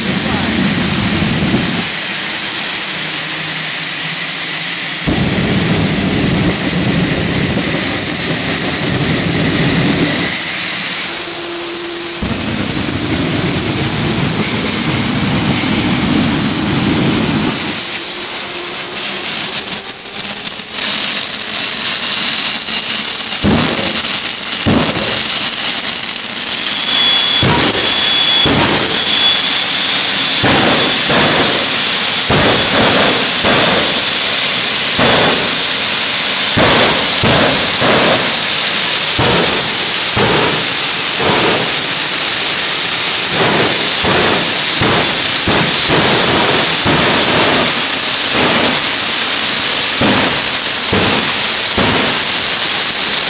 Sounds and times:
Vehicle: 0.0 - 53.2.

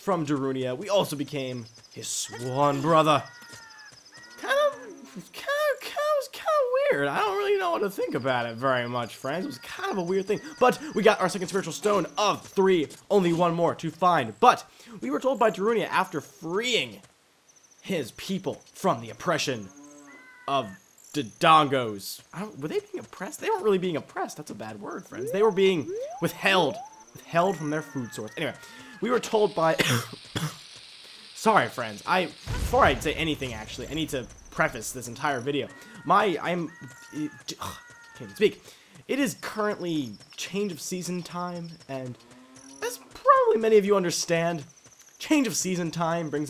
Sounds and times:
Speech: 0.0 - 3.3, 4.4 - 17.0, 17.9 - 19.7, 20.5 - 30.1, 31.4 - 42.2, 42.8 - 46.4
Animal: 0.2 - 13.5, 18.5 - 21.3, 22.3 - 29.8, 31.8 - 44.7.

